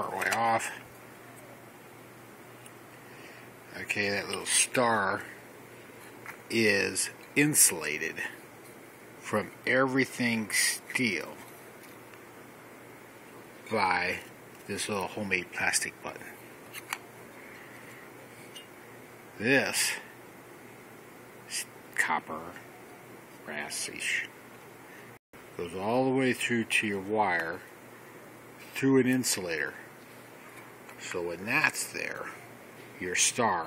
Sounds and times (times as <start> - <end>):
Speech: 0.0 - 0.9, 3.7 - 5.4, 6.5 - 8.4, 9.2 - 11.4, 13.7 - 16.4, 19.4 - 20.1, 21.5 - 22.7, 23.4 - 24.3, 25.6 - 27.7, 28.7 - 29.9, 31.0 - 32.4, 33.0 - 33.6.